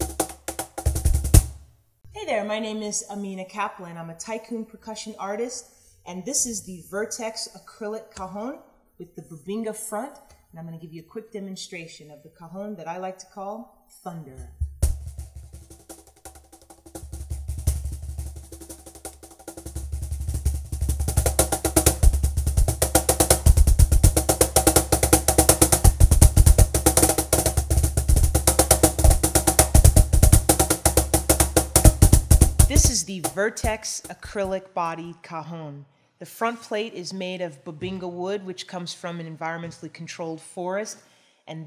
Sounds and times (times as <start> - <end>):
Percussion: 0.0 - 2.2, 14.4 - 35.0.